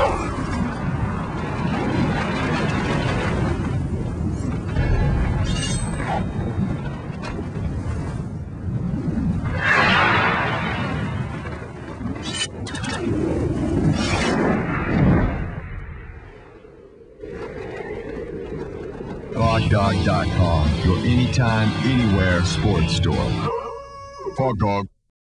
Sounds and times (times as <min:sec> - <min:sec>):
Music: 0:19.4 - 0:23.5
Speech: 0:19.4 - 0:23.5, 0:24.4 - 0:25.0.